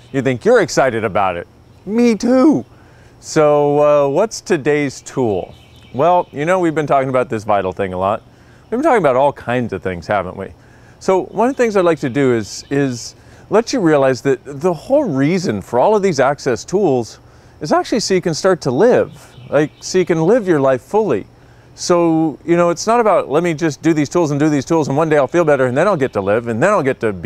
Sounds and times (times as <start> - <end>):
Speech: 0.1 - 27.2.